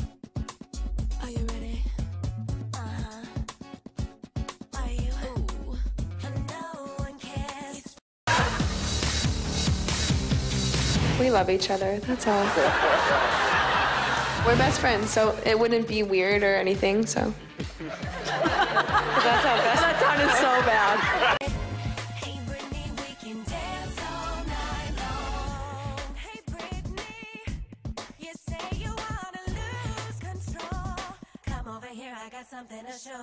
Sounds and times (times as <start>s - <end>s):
Music: 0.0s - 33.2s.